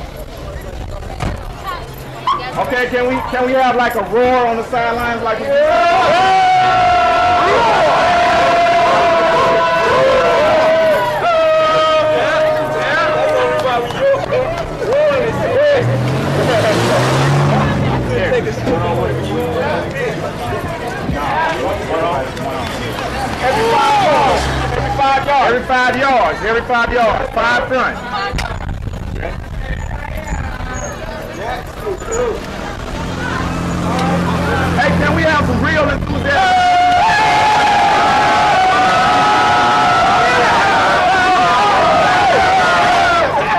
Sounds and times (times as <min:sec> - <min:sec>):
Hubbub, speech noise, speech babble: 0:00.0 - 0:43.5
Outside, urban or manmade: 0:00.0 - 0:43.5
Speech: 0:10.9 - 0:36.8.